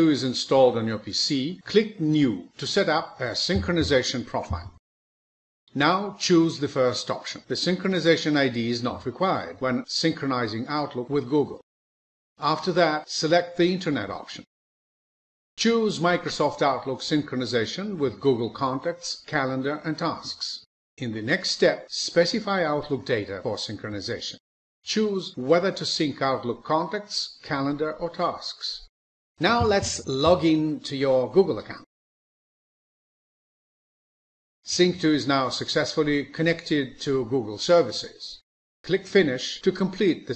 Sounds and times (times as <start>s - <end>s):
Speech: 0.0s - 4.8s, 5.7s - 11.7s, 12.4s - 14.5s, 15.6s - 31.9s, 34.7s - 40.3s.